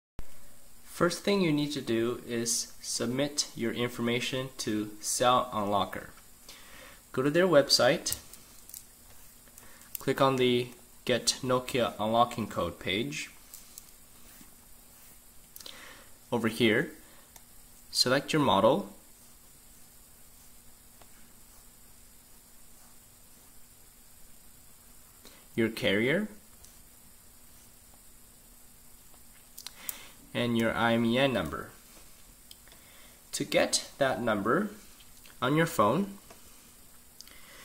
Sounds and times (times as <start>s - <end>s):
Speech: 0.9s - 6.2s, 7.1s - 8.2s, 10.0s - 13.4s, 16.3s - 17.0s, 17.9s - 19.0s, 25.6s - 26.4s, 30.3s - 31.8s, 33.3s - 34.8s, 35.4s - 36.2s.